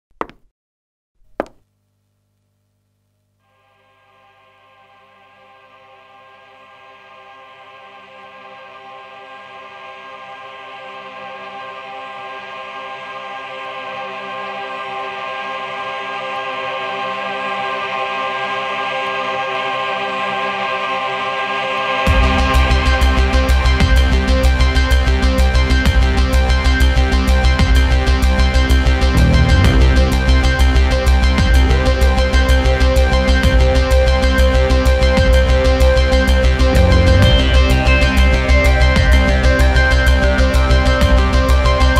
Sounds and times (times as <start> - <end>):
Music: 3.4 - 41.9.